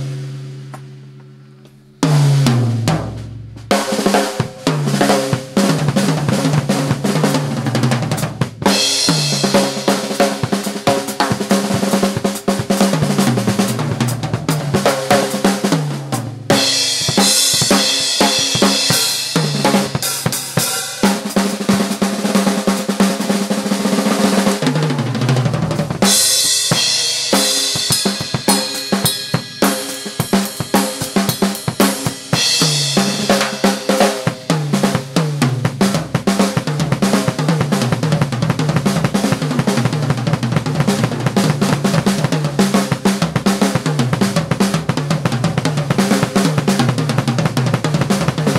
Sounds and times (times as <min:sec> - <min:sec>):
Drum kit: 0:00.0 - 0:48.5
Bass drum: 0:02.0 - 0:21.9, 0:24.6 - 0:48.5
Drum roll: 0:02.0 - 0:48.5.